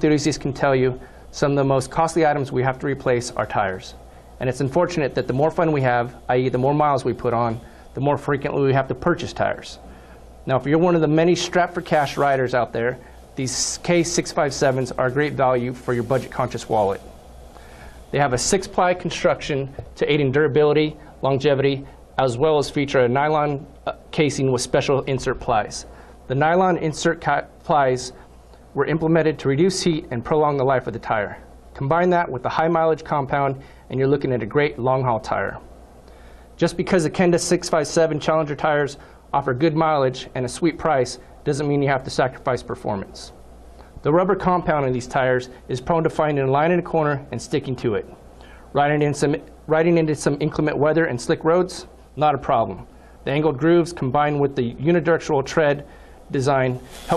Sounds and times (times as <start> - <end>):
Speech: 0.0 - 9.8, 10.4 - 17.1, 18.1 - 28.2, 28.8 - 35.7, 36.6 - 43.4, 44.0 - 57.1.